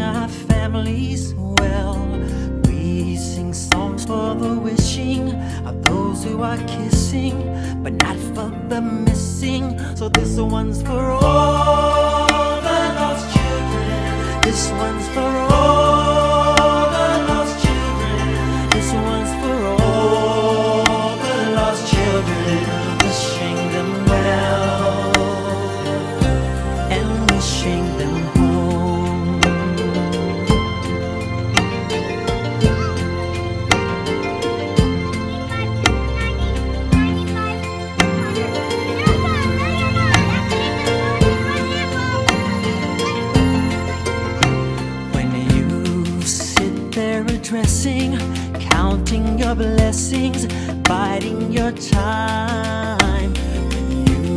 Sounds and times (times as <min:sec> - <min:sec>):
Music: 0:00.0 - 0:54.3.